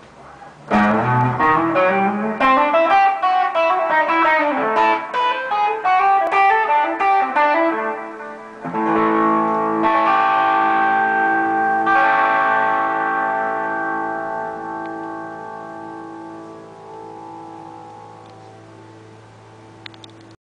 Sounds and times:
Electric guitar: 0.0s - 20.4s
Strum: 0.6s - 20.4s.

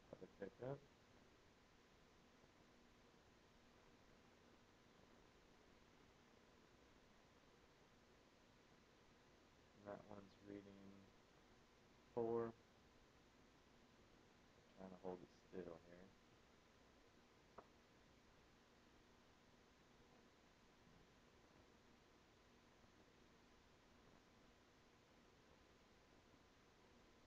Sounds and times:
Speech: 0.0s - 0.8s, 9.8s - 11.1s, 12.2s - 12.5s, 14.7s - 16.1s.

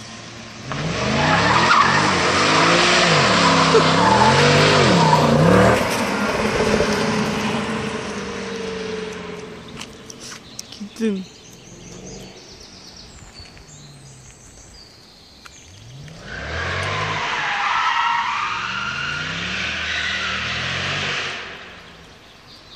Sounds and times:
Race car, auto racing: 0.0s - 10.6s, 15.6s - 22.7s
Outside, rural or natural: 0.0s - 22.7s.

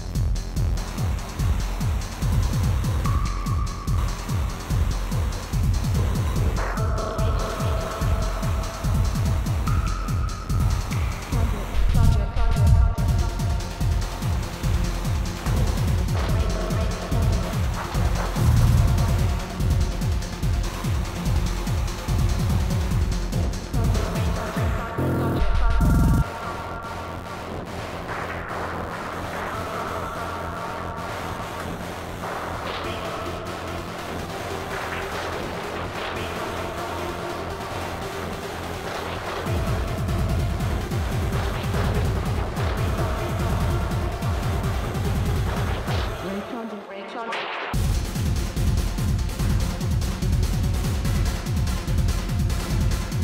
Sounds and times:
Disco: 0.0s - 53.2s.

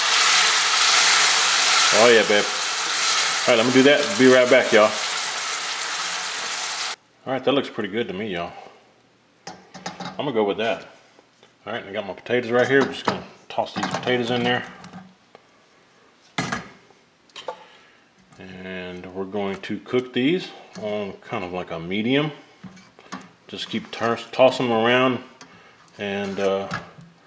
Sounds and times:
Speech: 1.9s - 2.6s, 3.5s - 5.0s, 7.2s - 8.7s, 10.2s - 11.0s, 11.6s - 14.8s, 18.4s - 22.4s, 23.5s - 25.3s, 26.0s - 26.9s.

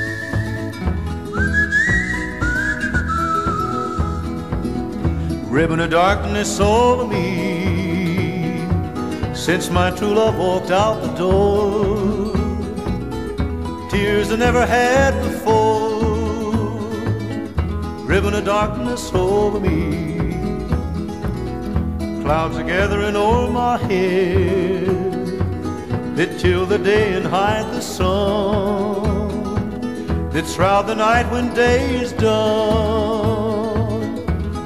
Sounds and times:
Flamenco: 0.0s - 34.6s
Mandolin: 0.0s - 34.6s.

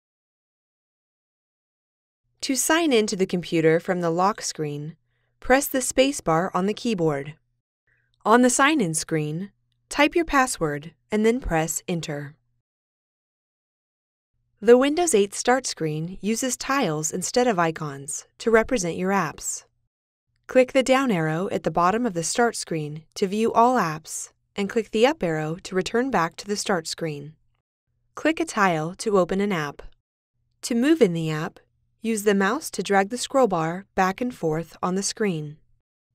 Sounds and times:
Speech: 2.4s - 7.4s, 8.3s - 12.4s, 14.6s - 19.6s, 20.5s - 27.4s, 28.2s - 29.9s, 30.6s - 35.6s.

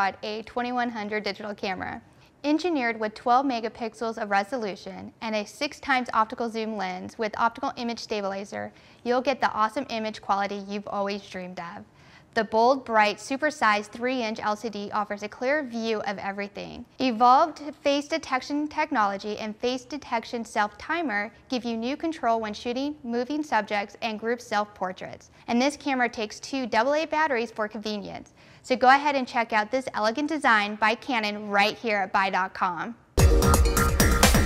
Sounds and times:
Speech: 0.0s - 11.8s, 12.4s - 33.0s.

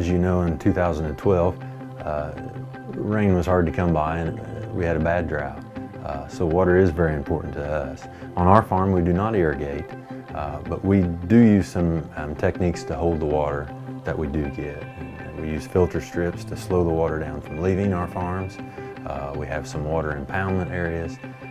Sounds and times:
Speech: 0.0s - 21.2s
Music: 0.0s - 21.5s.

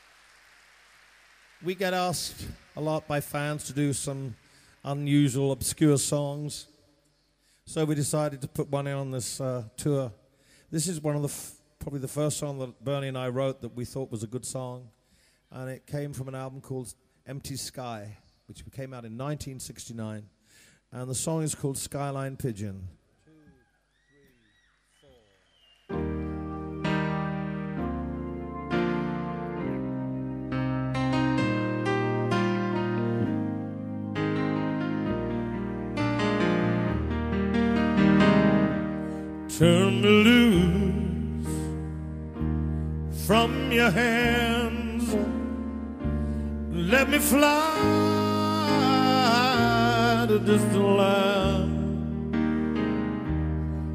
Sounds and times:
Speech: 1.6s - 6.7s, 7.7s - 14.9s, 15.5s - 20.3s, 21.0s - 23.6s.

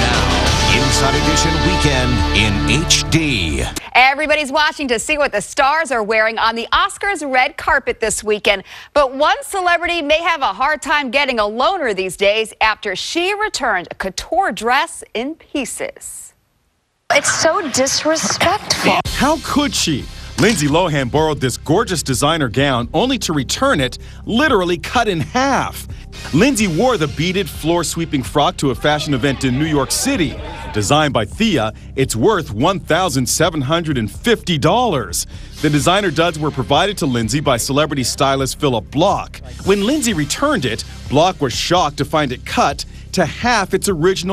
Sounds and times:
Music: 0.0s - 3.8s, 18.2s - 44.3s
Speech: 0.0s - 16.3s, 17.1s - 44.3s.

